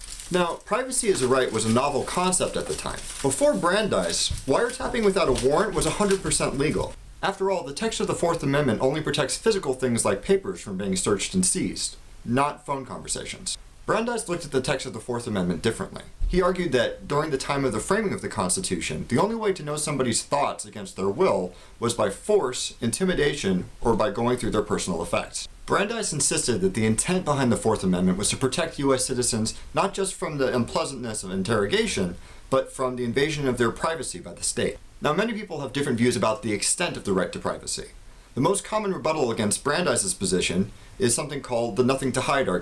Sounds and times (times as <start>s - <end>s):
Speech: 0.3s - 42.6s.